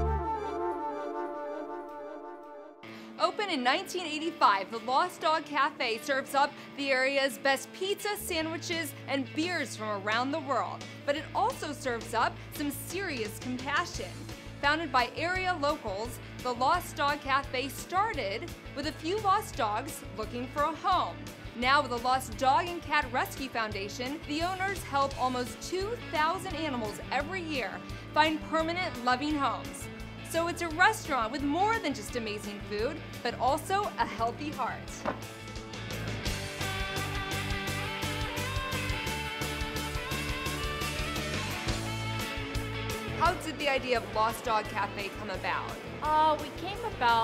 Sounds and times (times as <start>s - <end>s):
Music: 0.0s - 47.2s
Speech: 3.2s - 35.0s, 43.2s - 47.2s.